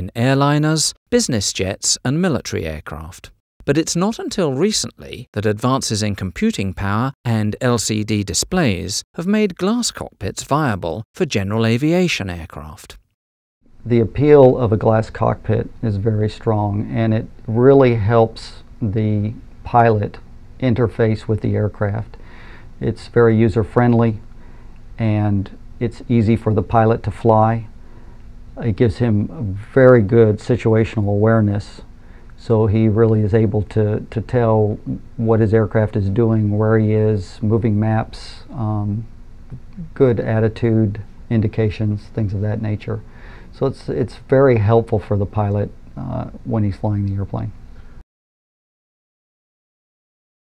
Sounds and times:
Speech: 0.0 - 13.0, 13.8 - 22.2, 22.8 - 24.2, 25.0 - 27.7, 28.6 - 47.6.

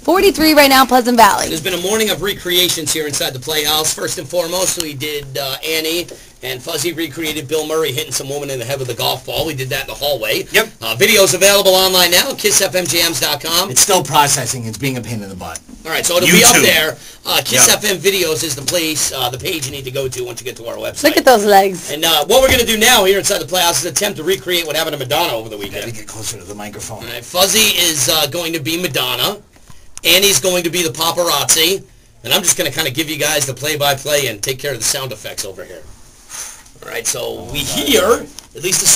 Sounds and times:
Speech: 0.0 - 29.4, 36.8 - 38.9.

